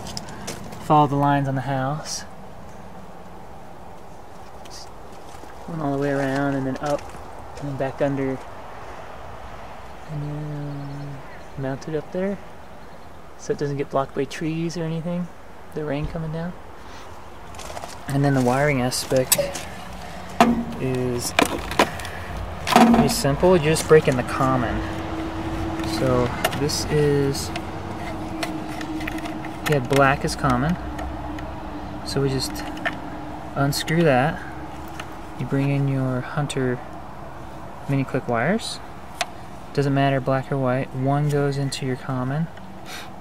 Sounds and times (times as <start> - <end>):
Speech: 0.8 - 2.3, 4.7 - 4.9, 5.7 - 7.0, 7.6 - 8.4, 10.1 - 12.4, 13.4 - 16.6, 18.1 - 19.6, 20.8 - 21.5, 22.8 - 24.9, 25.9 - 27.5, 29.7 - 30.8, 32.1 - 32.7, 33.6 - 34.5, 35.4 - 36.8, 37.9 - 38.8, 39.7 - 42.5.